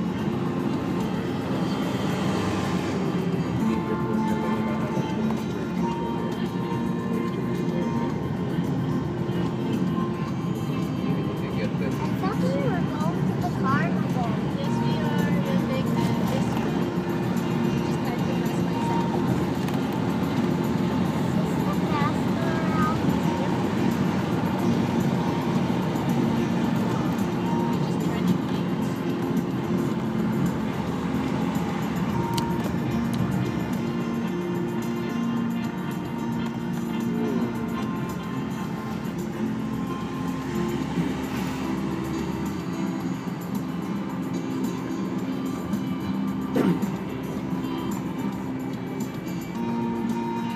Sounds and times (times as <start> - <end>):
Music: 0.0 - 50.5
Vehicle: 0.0 - 50.5.